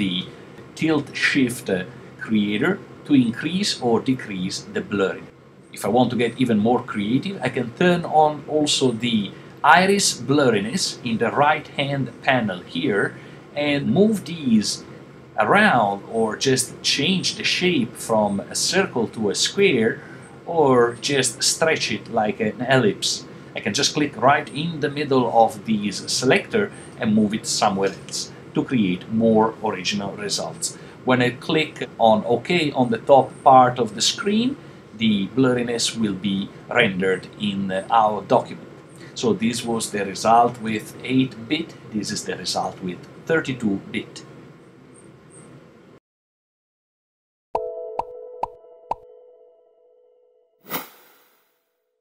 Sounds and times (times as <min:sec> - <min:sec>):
Speech: 0:00.0 - 0:44.3.